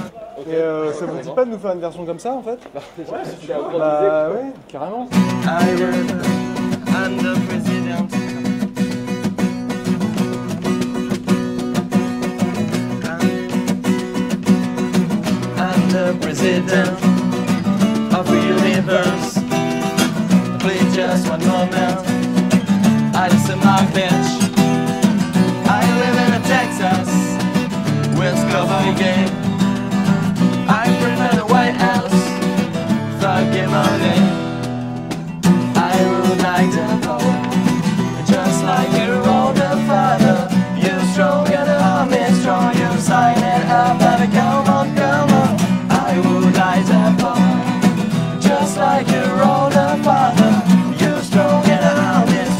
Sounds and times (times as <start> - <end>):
Speech: 0.1 - 5.2
Music: 5.1 - 52.5.